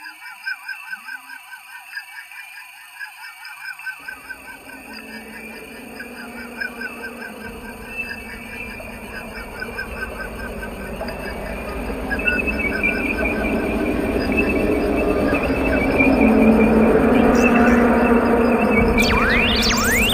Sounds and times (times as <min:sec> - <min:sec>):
Electronic music: 0:04.1 - 0:20.1.